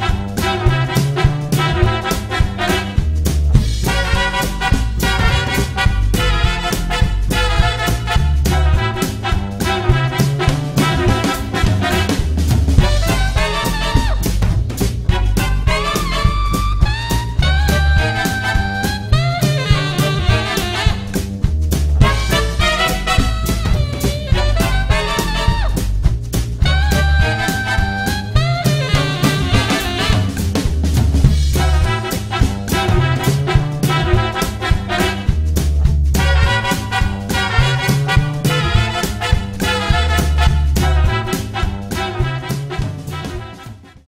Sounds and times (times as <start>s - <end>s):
Drum: 0.0s - 44.0s.